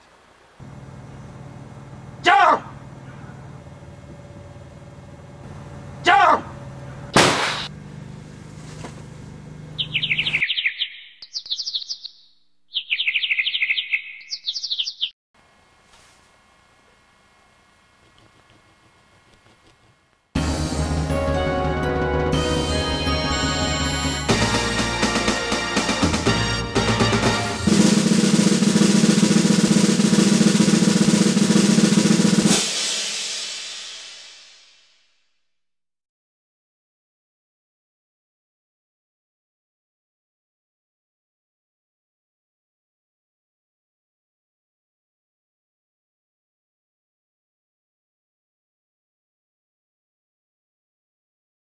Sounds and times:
Outside, rural or natural: 0.0 - 15.2, 24.7 - 32.5
Speech: 2.2 - 2.8, 6.0 - 6.6.

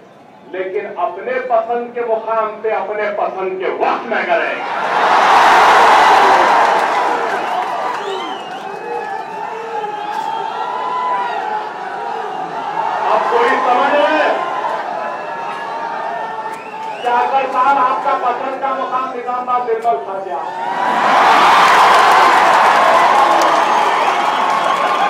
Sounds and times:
Male speech, man speaking: 0.5 - 4.6, 13.0 - 14.4, 17.0 - 20.5
Narration, monologue: 0.5 - 4.6, 17.0 - 20.4.

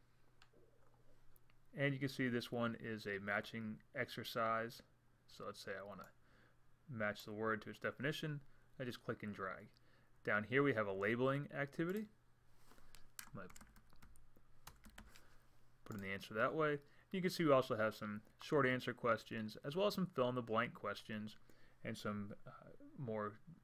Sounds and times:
Speech: 1.7 - 6.2, 6.9 - 12.2, 13.3 - 13.6, 15.9 - 23.6.

